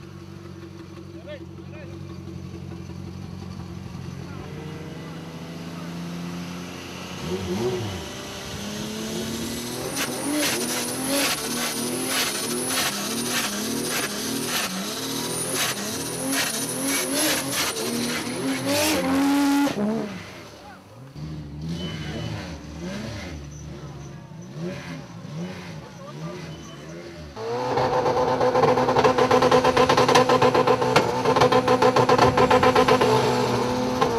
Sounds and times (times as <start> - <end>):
Accelerating, revving, vroom: 4.4 - 20.4, 21.2 - 34.1
Tire squeal: 7.2 - 34.1.